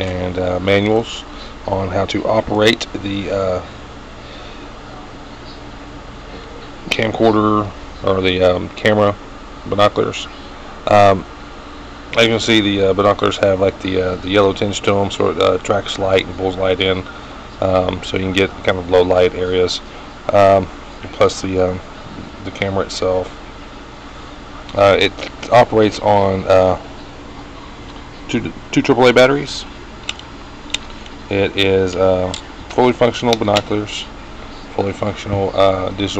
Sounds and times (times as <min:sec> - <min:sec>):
Speech: 0:00.0 - 0:03.7, 0:06.3 - 0:11.3, 0:12.2 - 0:23.4, 0:24.6 - 0:26.8, 0:28.2 - 0:29.7, 0:31.3 - 0:36.1.